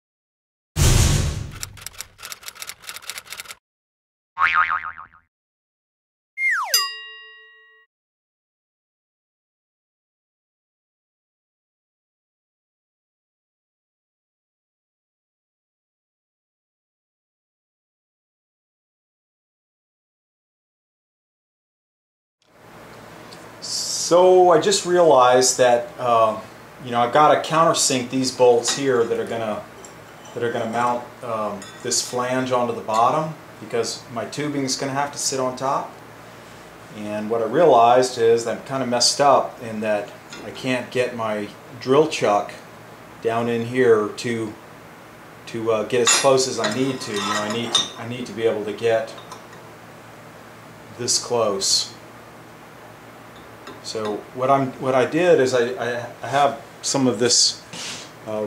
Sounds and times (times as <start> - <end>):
Boing: 4.4 - 5.3, 6.4 - 6.9.